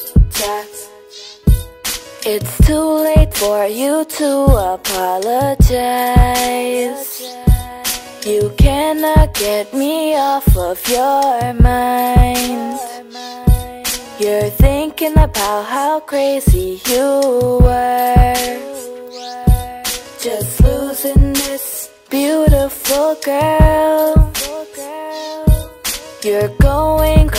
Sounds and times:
Music: 0.0 - 27.3.

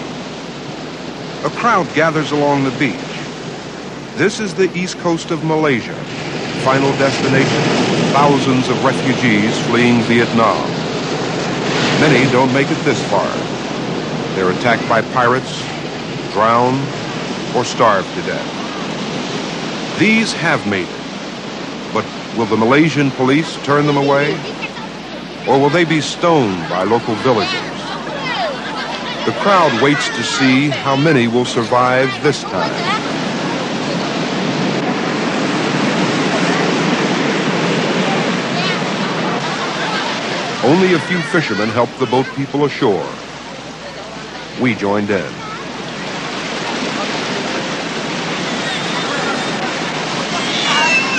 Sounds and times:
Waves, surf: 0.0 - 51.1.

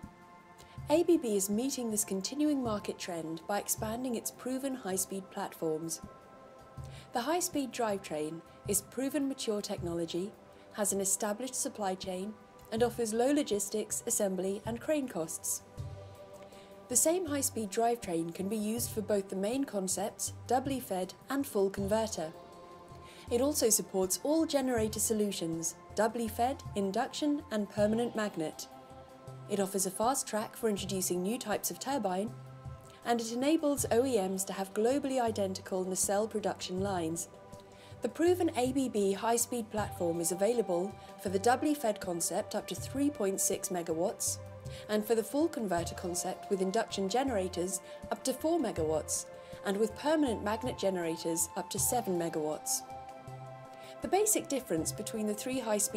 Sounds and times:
Music: 0.0 - 55.9
Speech: 0.9 - 6.0, 7.2 - 15.6, 16.9 - 22.3, 23.3 - 28.7, 29.5 - 32.3, 33.0 - 37.3, 38.0 - 52.8, 54.0 - 55.9.

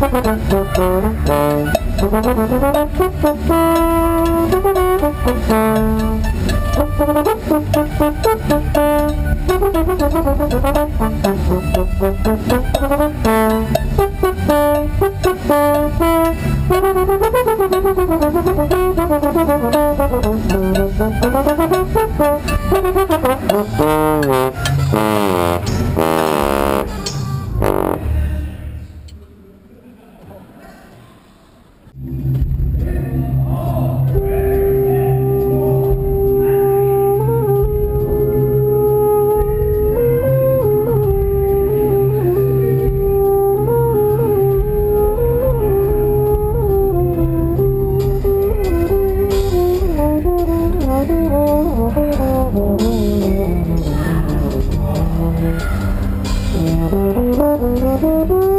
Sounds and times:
Music: 0.0 - 29.1, 32.0 - 58.5
Speech: 28.0 - 31.2, 32.8 - 36.8.

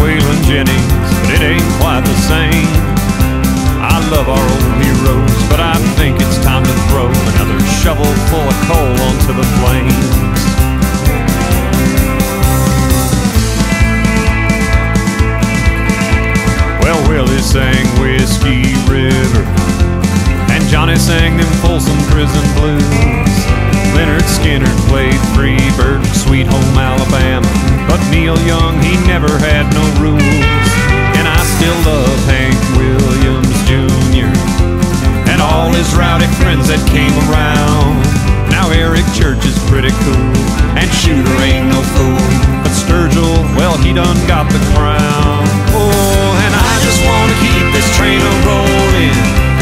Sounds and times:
Country: 0.0 - 49.6.

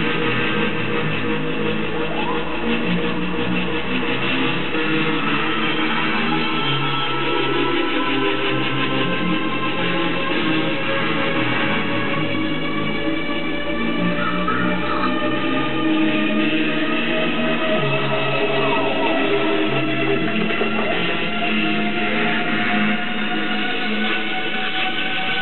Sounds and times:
Music: 0.0 - 25.4.

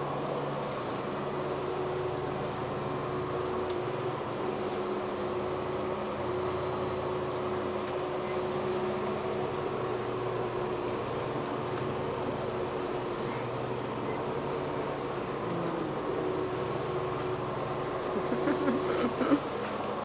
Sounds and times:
Vehicle: 0.0 - 20.0.

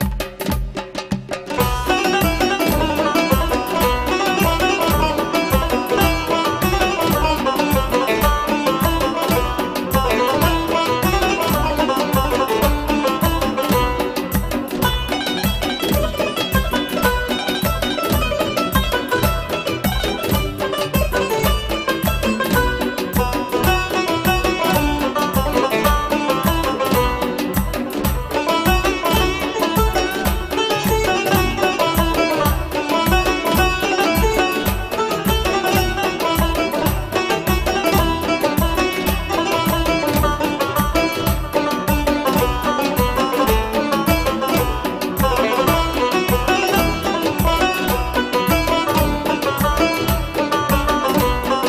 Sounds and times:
Music: 0.0 - 51.6.

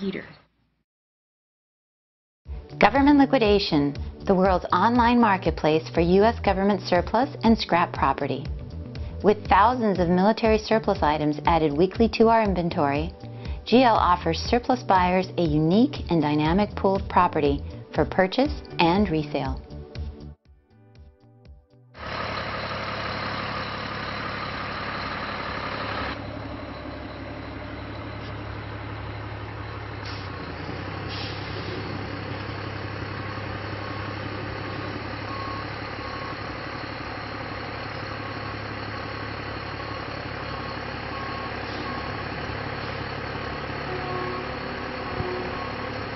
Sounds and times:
Speech: 0.0 - 0.4, 2.8 - 8.5, 9.3 - 13.1, 13.7 - 19.6
Music: 2.5 - 22.0.

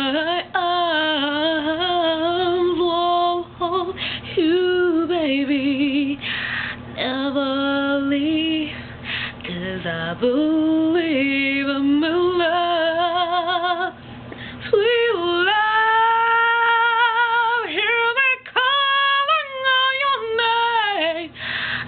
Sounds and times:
Female singing: 0.0 - 6.2, 7.0 - 14.0, 14.6 - 21.4.

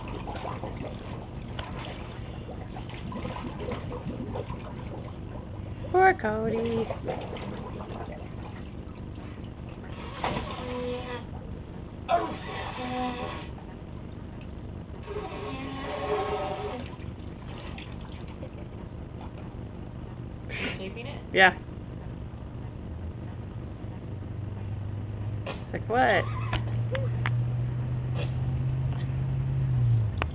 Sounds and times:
Speech: 5.9 - 6.9, 20.8 - 21.6, 25.7 - 26.3.

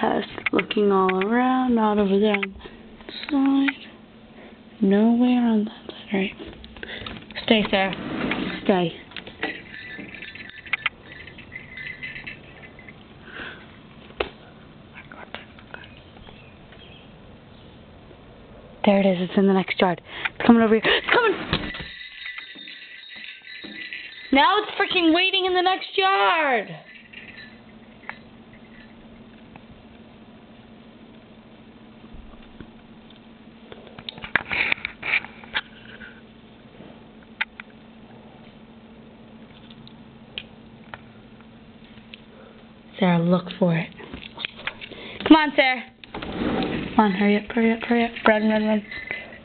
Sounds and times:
Speech: 0.0 - 3.9, 4.8 - 6.4, 7.4 - 8.0, 18.8 - 21.4, 24.3 - 26.9, 42.9 - 44.0, 45.3 - 45.9, 47.0 - 48.9.

